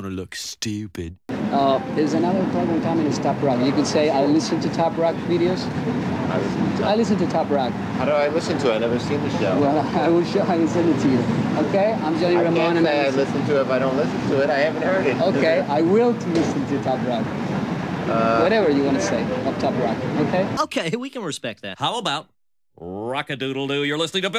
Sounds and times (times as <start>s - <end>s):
Speech: 0.0s - 5.3s, 18.9s - 24.3s.